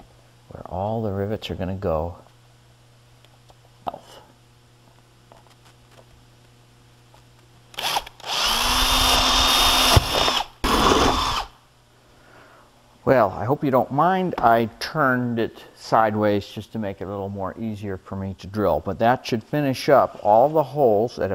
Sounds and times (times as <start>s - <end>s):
Speech: 0.5s - 2.3s, 13.0s - 21.3s
Power tool: 7.8s - 11.6s.